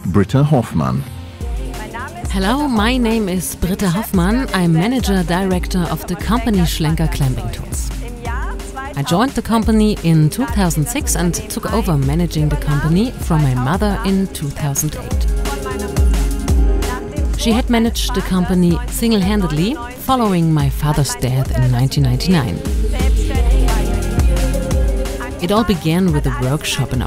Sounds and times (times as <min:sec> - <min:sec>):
Speech: 0:00.0 - 0:01.1, 0:02.3 - 0:15.9, 0:17.4 - 0:22.6, 0:25.4 - 0:27.0
Music: 0:00.1 - 0:27.0.